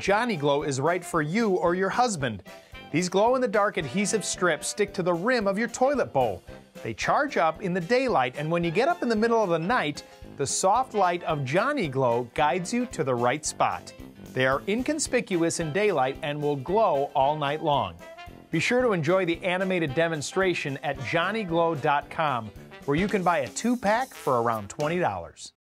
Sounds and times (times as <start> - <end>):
Speech: 0.0 - 18.0, 18.6 - 25.6
Music: 0.0 - 25.6.